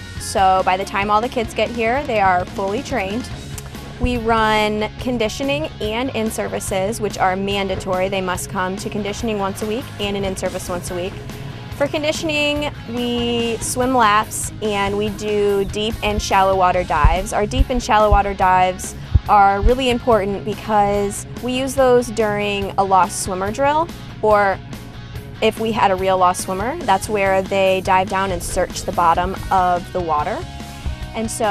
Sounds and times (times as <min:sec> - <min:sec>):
Music: 0:00.0 - 0:31.5
Speech: 0:00.2 - 0:03.3, 0:04.0 - 0:11.1, 0:11.8 - 0:24.6, 0:25.4 - 0:30.4, 0:31.2 - 0:31.5.